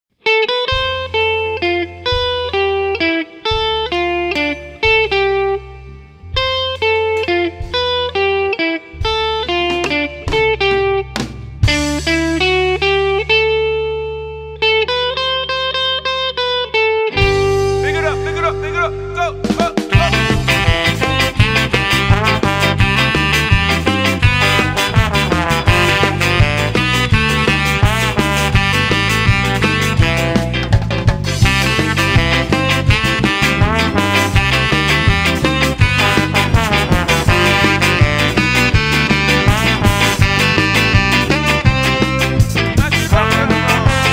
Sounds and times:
Christmas music: 0.3 - 44.1.

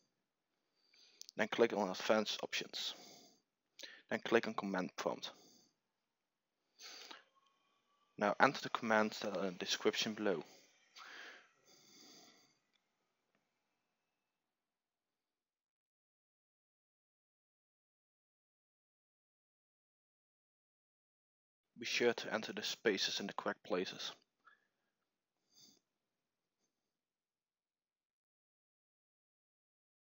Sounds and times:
Speech: 1.3 - 3.0, 4.1 - 5.4, 8.2 - 10.5, 21.8 - 24.2.

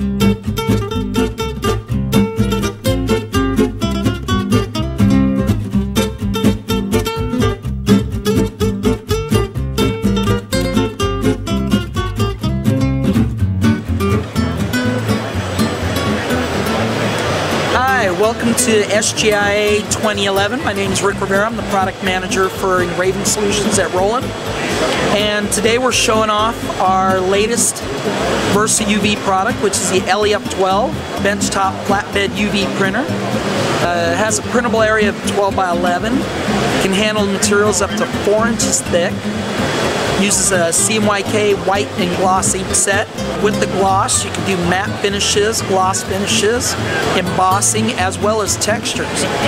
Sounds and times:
Music: 0.0 - 49.4
Speech: 17.7 - 27.8, 28.4 - 33.1, 33.8 - 36.2, 36.8 - 39.2, 40.2 - 49.4.

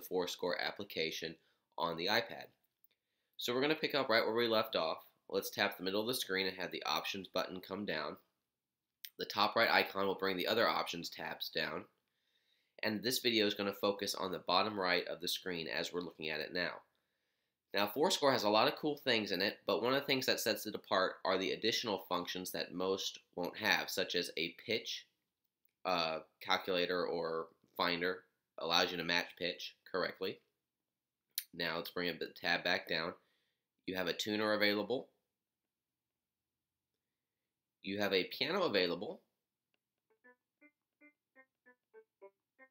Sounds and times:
Speech: 0.0 - 2.6, 3.4 - 8.2, 9.1 - 11.9, 12.8 - 16.9, 17.7 - 25.1, 25.9 - 30.4, 31.4 - 33.2, 33.9 - 35.1, 37.8 - 39.3.

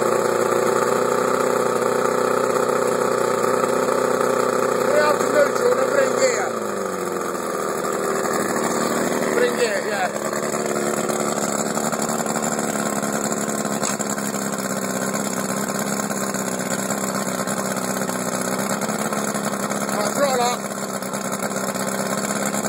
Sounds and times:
Speech: 4.9 - 6.6, 9.2 - 10.2, 19.9 - 20.6.

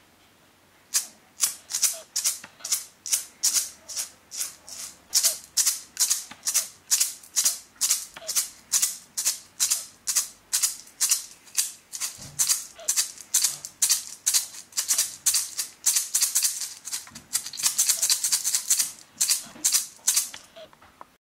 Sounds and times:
Inside, small room: 0.0 - 21.2
Rattle (instrument): 0.9 - 20.5.

